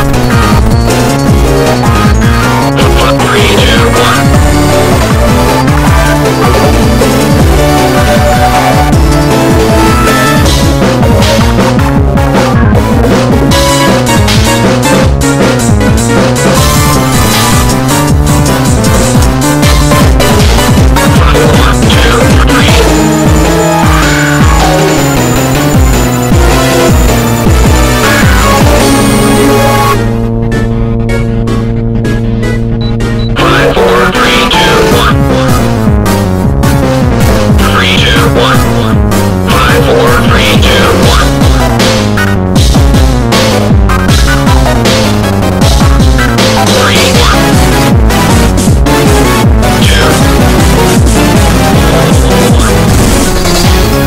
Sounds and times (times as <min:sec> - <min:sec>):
Techno: 0:00.0 - 0:54.0.